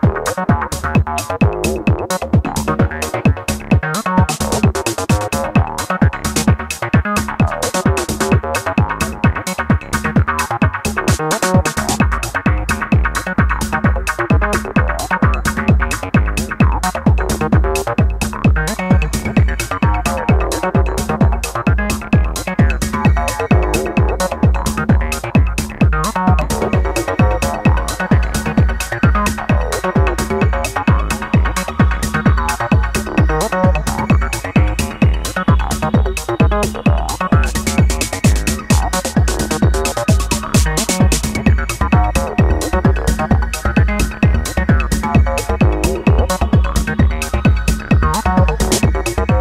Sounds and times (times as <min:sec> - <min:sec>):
Techno: 0:00.0 - 0:49.4.